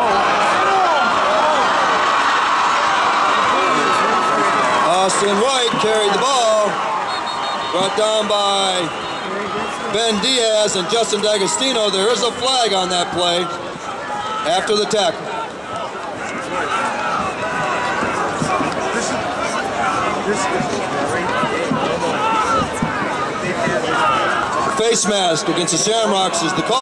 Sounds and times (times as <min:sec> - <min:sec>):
Speech: 0:14.4 - 0:15.2, 0:24.7 - 0:26.8.